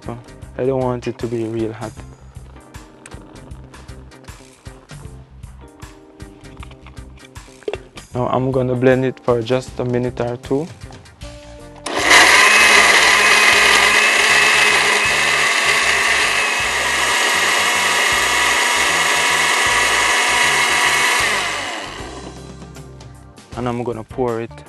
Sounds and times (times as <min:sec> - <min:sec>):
Blender: 0:11.9 - 0:22.5.